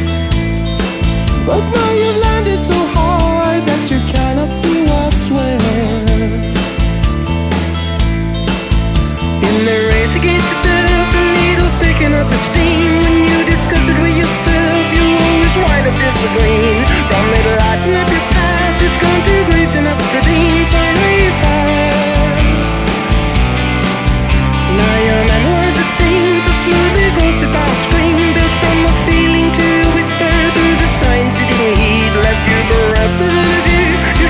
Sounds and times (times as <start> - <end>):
Music: 0.0 - 34.3.